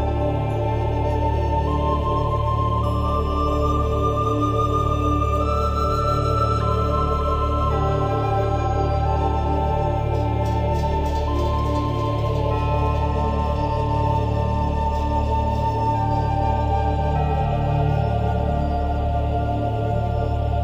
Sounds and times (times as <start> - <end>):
Background music: 0.0 - 20.6.